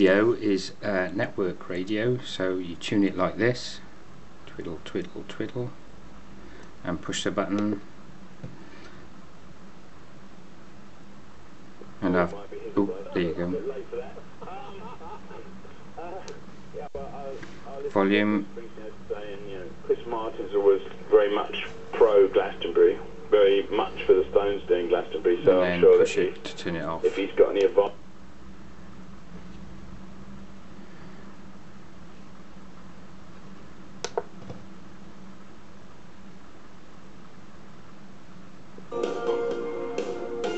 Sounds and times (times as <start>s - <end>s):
Speech: 0.0s - 3.9s, 4.5s - 5.8s, 6.8s - 7.9s, 12.0s - 15.4s, 16.0s - 28.0s.